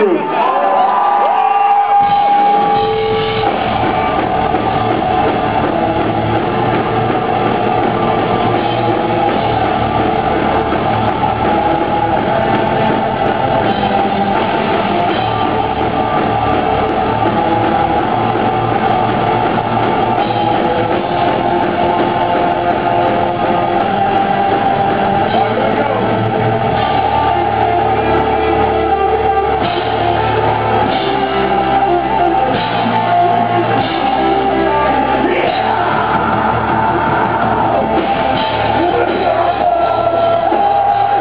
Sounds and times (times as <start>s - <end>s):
Music: 0.0s - 41.2s.